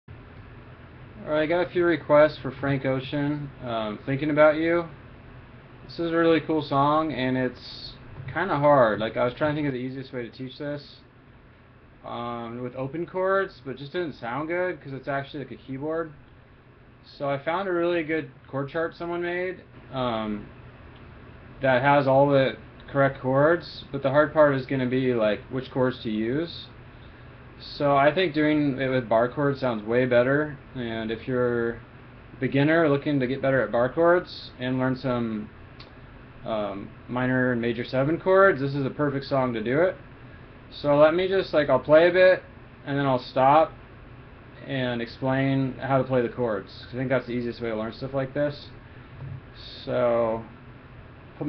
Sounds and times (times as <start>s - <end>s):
Speech: 1.2s - 5.0s, 5.9s - 11.1s, 12.0s - 16.2s, 17.0s - 20.5s, 21.6s - 26.8s, 27.6s - 35.6s, 36.4s - 40.0s, 40.7s - 43.8s, 44.6s - 50.6s.